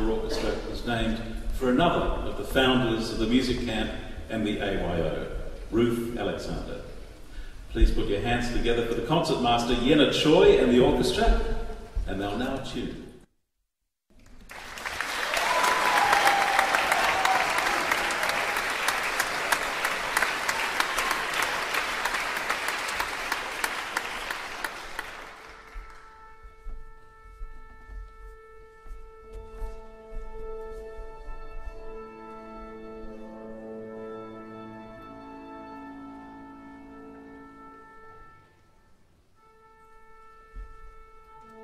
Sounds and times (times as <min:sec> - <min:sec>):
Speech: 0:00.0 - 0:06.9, 0:07.8 - 0:13.1
Applause: 0:14.2 - 0:26.2.